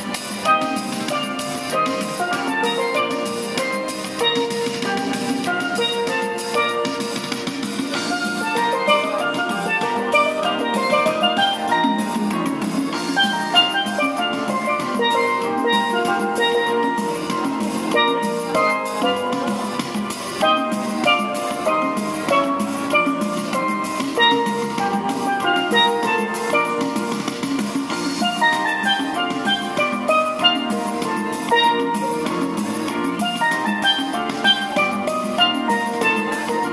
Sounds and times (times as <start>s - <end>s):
Steelpan: 0.0s - 36.7s.